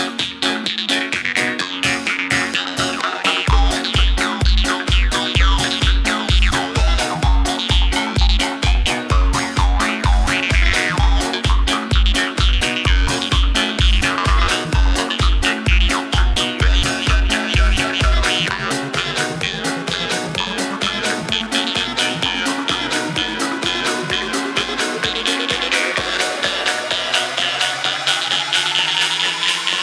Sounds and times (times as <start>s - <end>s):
House music: 0.0s - 29.8s.